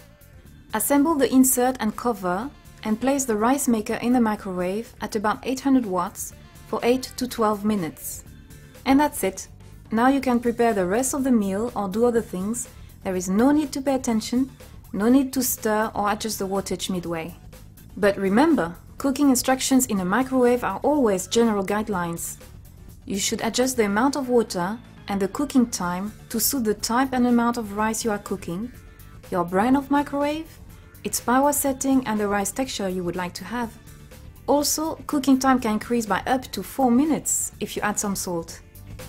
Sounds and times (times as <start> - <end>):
Music: 0.0 - 39.0
Speech: 0.8 - 8.3, 8.9 - 17.4, 18.0 - 22.4, 23.1 - 33.8, 34.5 - 38.6.